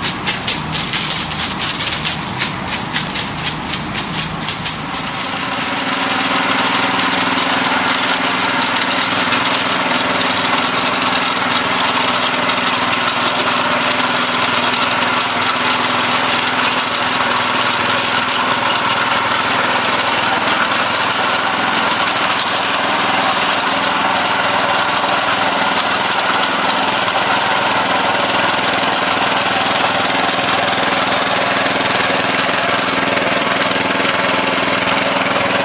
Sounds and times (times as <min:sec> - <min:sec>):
Water: 0:00.0 - 0:35.6.